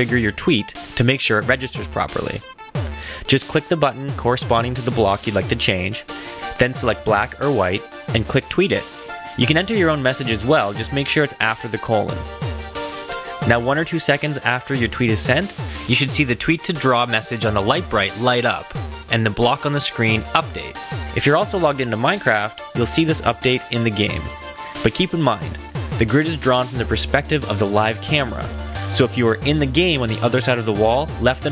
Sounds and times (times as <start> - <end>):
Speech: 0.0 - 2.5, 3.2 - 12.2, 13.4 - 31.5
Music: 0.0 - 31.5.